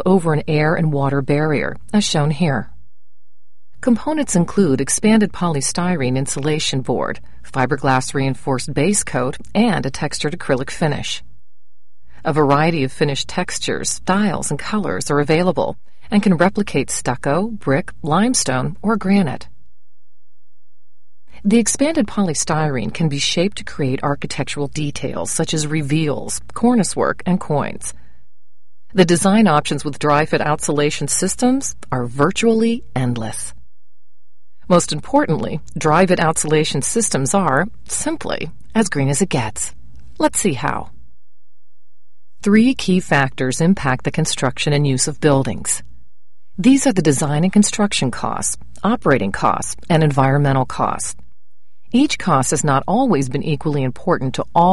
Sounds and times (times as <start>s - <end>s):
Speech synthesizer: 0.0s - 2.7s, 3.8s - 11.2s, 12.3s - 19.5s, 21.4s - 27.9s, 29.0s - 33.5s, 34.7s - 40.9s, 42.5s - 45.8s, 46.6s - 51.2s, 52.0s - 54.7s.